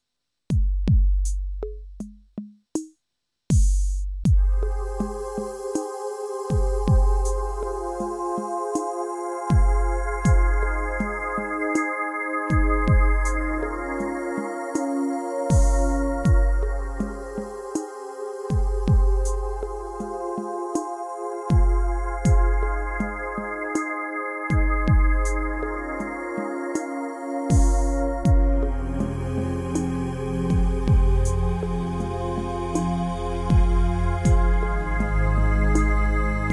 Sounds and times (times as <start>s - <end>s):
Music: 0.5s - 36.5s.